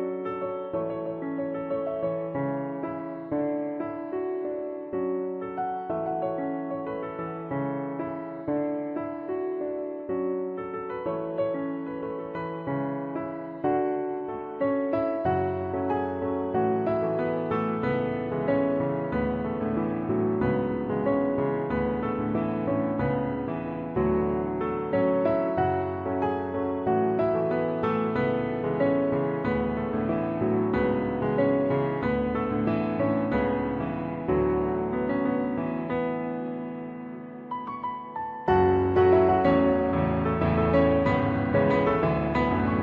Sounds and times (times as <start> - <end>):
Music: 0.0 - 42.8.